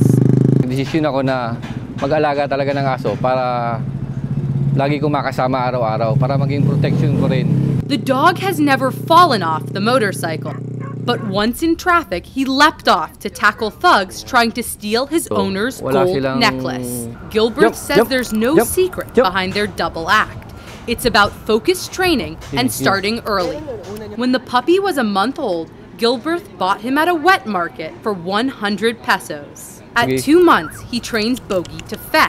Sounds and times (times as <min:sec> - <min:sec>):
Speech: 0:00.6 - 0:03.8, 0:04.8 - 0:10.5, 0:11.1 - 0:20.3, 0:20.9 - 0:32.2.